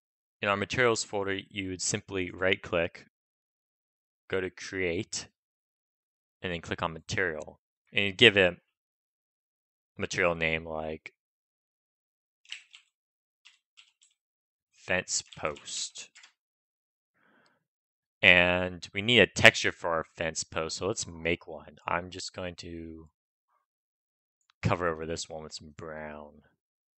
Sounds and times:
Speech: 0.4 - 3.1, 4.3 - 5.4, 6.4 - 8.7, 10.0 - 11.2, 14.8 - 16.2, 18.2 - 23.1, 24.6 - 26.6.

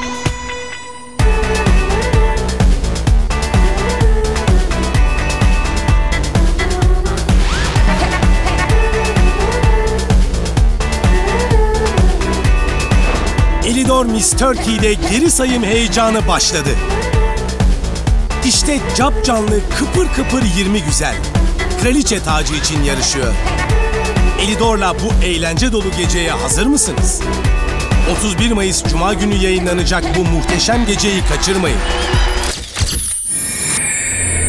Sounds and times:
Music: 0.0 - 34.4
Speech: 13.6 - 16.9, 18.4 - 23.4, 24.4 - 27.3, 28.0 - 31.8.

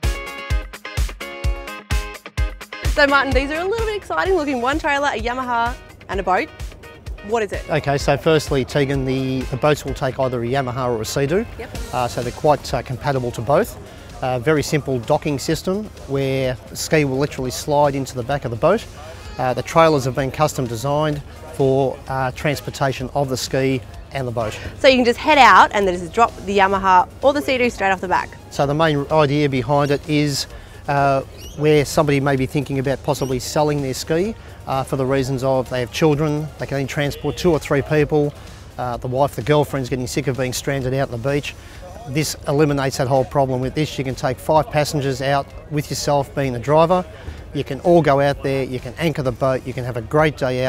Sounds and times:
Music: 0.0 - 50.6
Speech: 7.3 - 50.6.

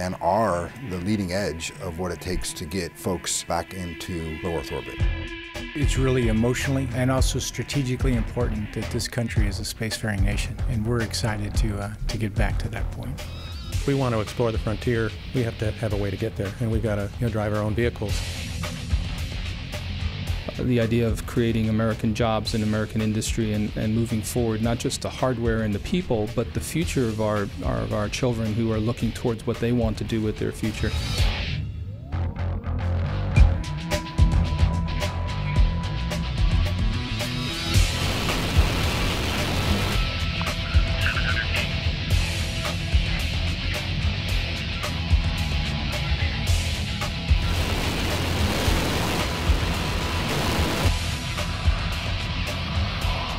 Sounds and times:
Speech: 0.0 - 5.0, 5.8 - 13.2, 13.8 - 18.2, 20.5 - 31.2
Music: 0.0 - 53.3.

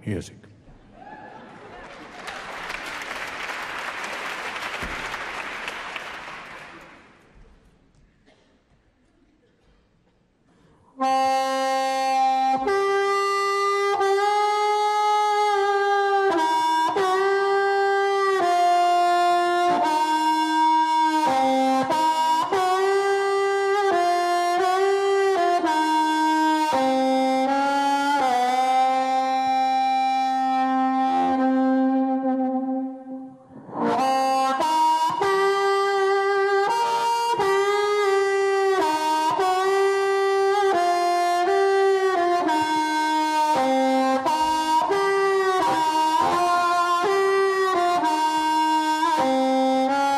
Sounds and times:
Music: 2.2 - 8.0, 10.5 - 50.1.

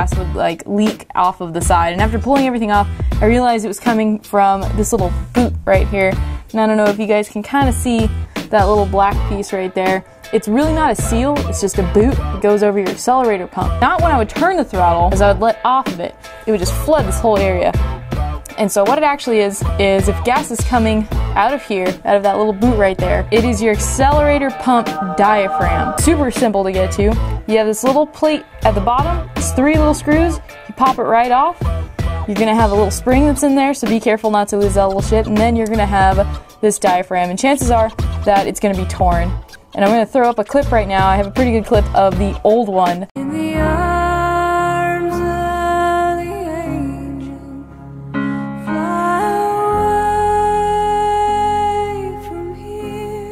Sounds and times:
Speech: 0.0 - 17.8, 18.5 - 31.6, 32.3 - 43.2
Music: 0.0 - 53.3.

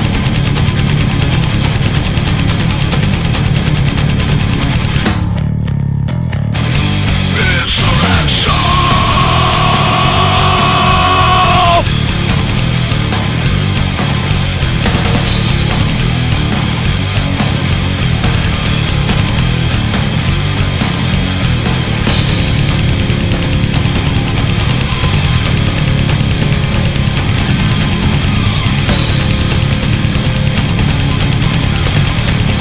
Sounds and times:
Music: 0.0 - 32.6.

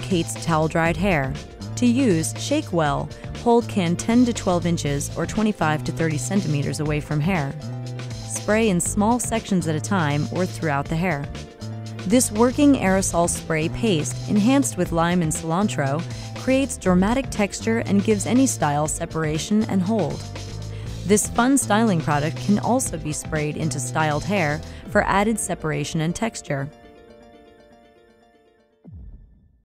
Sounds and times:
Speech: 0.0 - 7.6, 8.3 - 11.3, 12.1 - 20.2, 21.1 - 26.7
Music: 0.0 - 29.7.

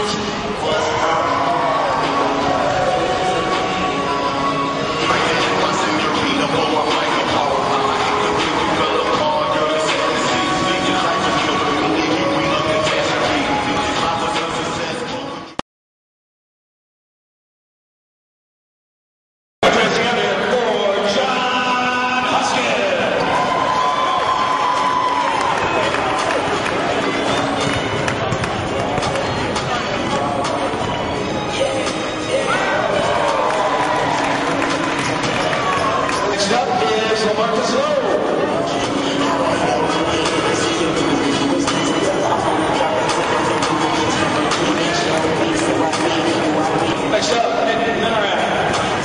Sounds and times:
Music: 0.0 - 15.6, 19.6 - 49.0
Speech: 19.6 - 23.2, 35.1 - 49.0.

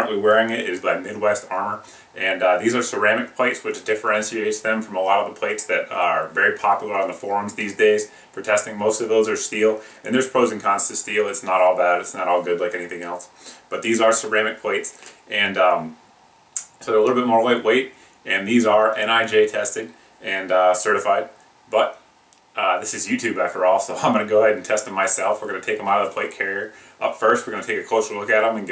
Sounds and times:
Speech: 0.0 - 16.0, 16.6 - 22.0, 22.6 - 28.7.

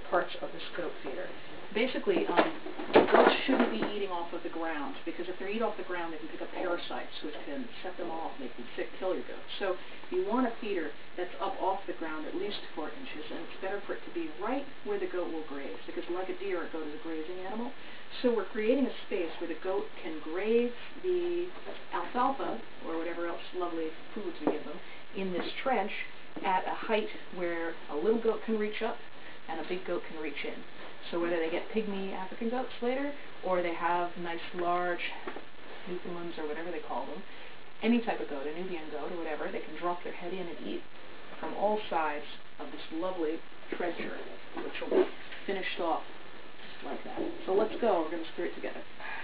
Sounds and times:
Speech: 0.0 - 40.8, 41.4 - 46.1, 46.7 - 49.2.

